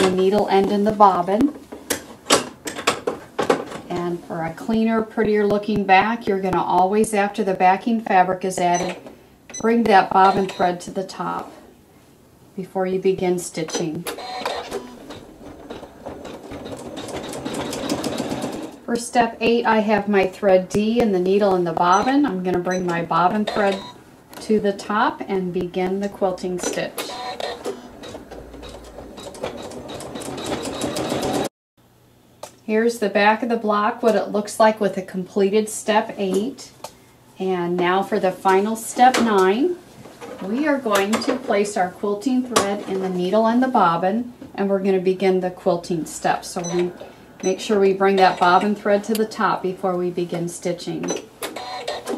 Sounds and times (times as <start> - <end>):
Speech: 0.0 - 1.6, 3.9 - 8.9, 9.6 - 11.6, 12.6 - 14.1, 18.9 - 23.8, 24.4 - 27.0, 32.7 - 36.8, 37.4 - 39.8, 40.4 - 46.9, 47.5 - 51.2
Sewing machine: 14.1 - 18.8, 27.0 - 31.5, 51.4 - 52.1.